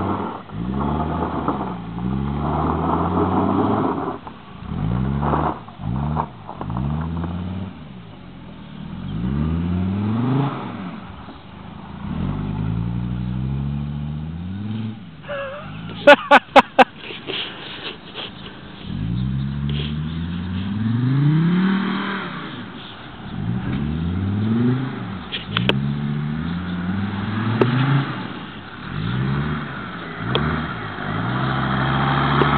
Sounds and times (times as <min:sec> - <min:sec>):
Car passing by: 0:18.8 - 0:32.5.